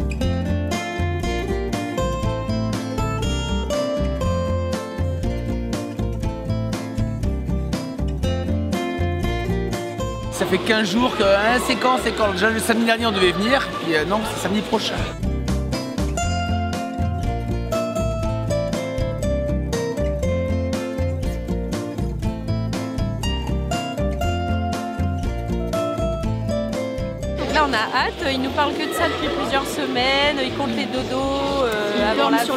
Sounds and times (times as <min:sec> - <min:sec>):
Music: 0:00.0 - 0:32.5.